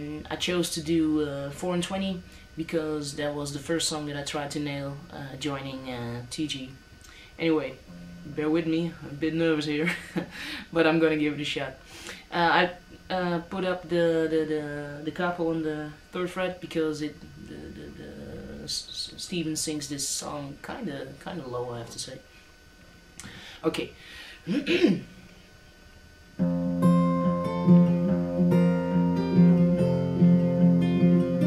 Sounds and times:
Speech: 0.0 - 6.8, 7.4 - 10.0, 10.7 - 22.3, 23.6 - 25.1
Guitar: 0.0 - 20.7, 26.1 - 31.4.

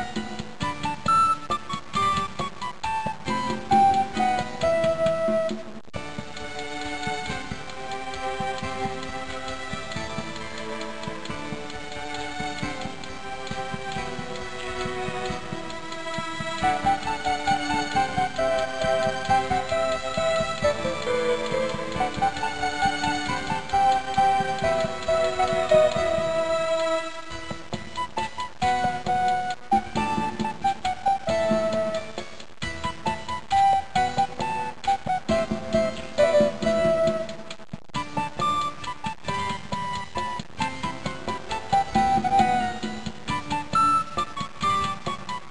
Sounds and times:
Music: 0.0 - 45.5.

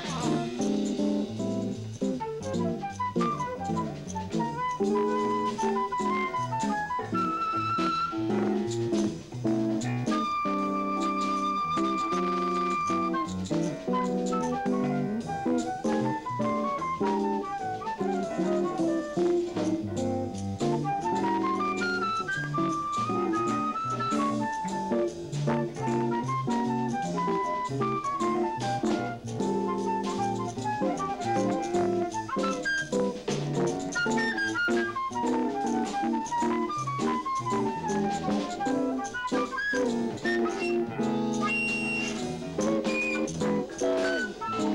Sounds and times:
Music: 0.0 - 44.7.

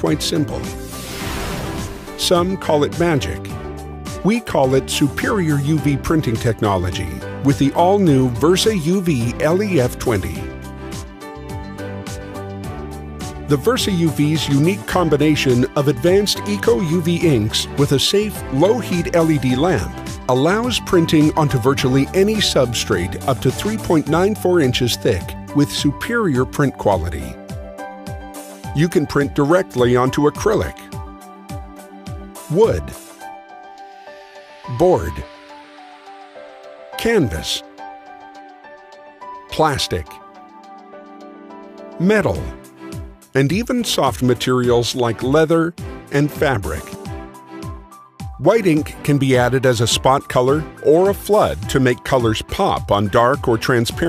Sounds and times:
Speech: 0.0 - 0.7, 2.2 - 3.6, 4.2 - 10.5, 13.5 - 27.4, 28.8 - 30.9, 32.5 - 33.0, 34.7 - 35.3, 37.0 - 37.7, 39.5 - 40.2, 42.0 - 42.6, 43.4 - 47.0, 48.4 - 54.0
Music: 0.0 - 54.0.

